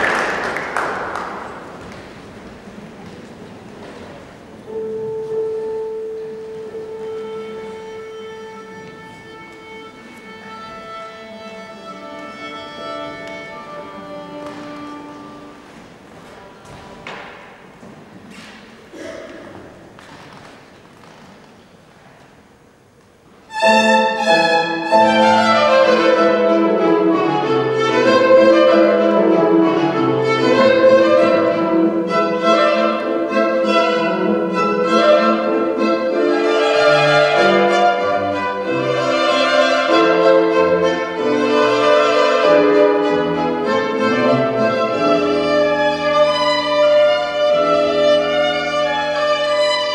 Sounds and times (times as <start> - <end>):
Violin, fiddle: 4.7 - 15.8, 23.5 - 49.9.